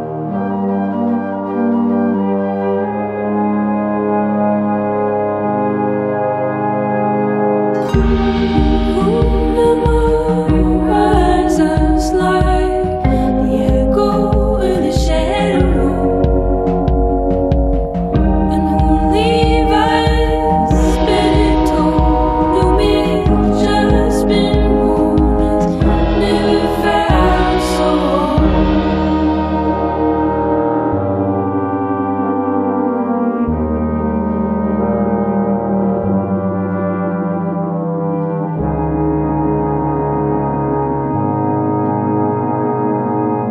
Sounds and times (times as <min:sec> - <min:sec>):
Brass instrument: 0:00.0 - 0:43.5.